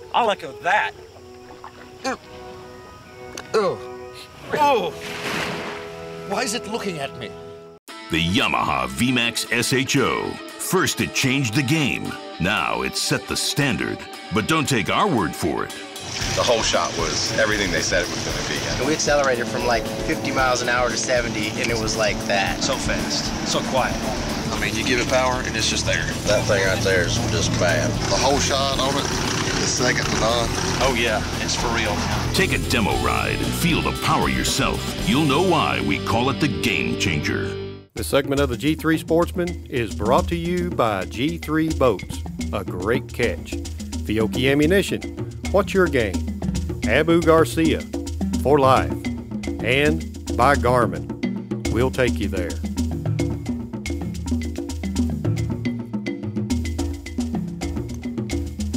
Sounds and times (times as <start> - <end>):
Music: 0.0 - 58.7
Speech: 6.3 - 7.4, 8.1 - 15.8, 16.4 - 29.0, 29.6 - 46.2, 46.8 - 47.8, 48.4 - 49.0, 49.6 - 51.0, 51.7 - 52.6.